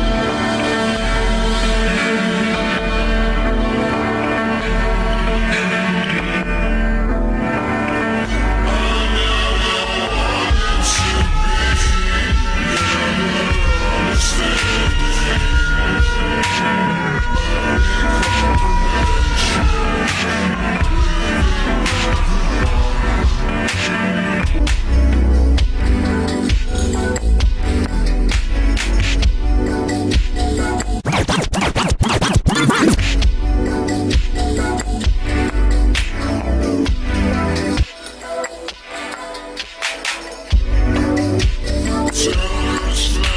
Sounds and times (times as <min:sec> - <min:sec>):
Music: 0:00.0 - 0:43.3.